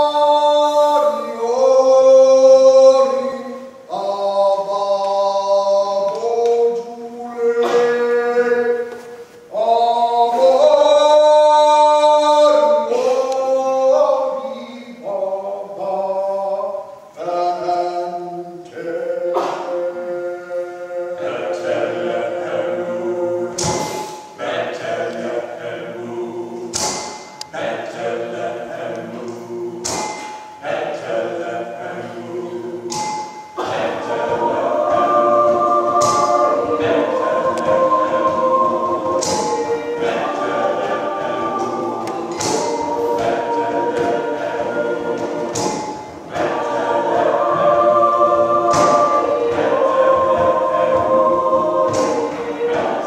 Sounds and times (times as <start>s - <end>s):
A capella: 0.0s - 53.0s.